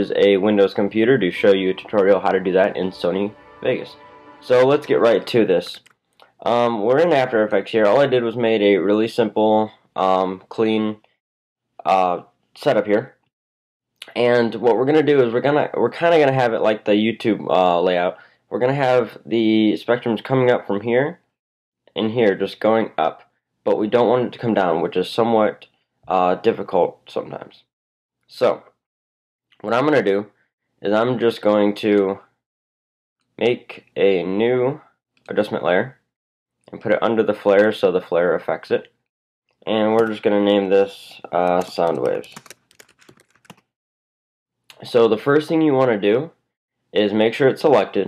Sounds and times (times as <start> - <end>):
Speech: 0.0 - 11.0, 11.8 - 13.2, 14.0 - 21.2, 21.9 - 27.7, 28.3 - 28.7, 29.6 - 32.3, 33.4 - 36.0, 36.7 - 38.9, 39.7 - 42.4, 44.7 - 46.4, 47.0 - 48.0
Music: 0.8 - 5.7.